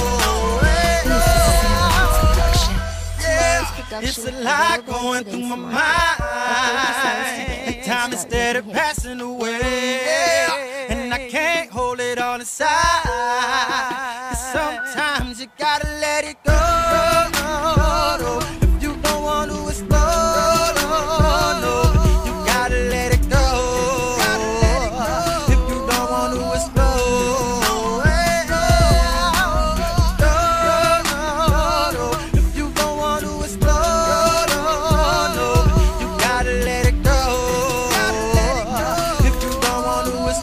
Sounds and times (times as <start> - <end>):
Hip hop music: 0.0 - 40.4
Rhythm and blues: 0.0 - 40.4.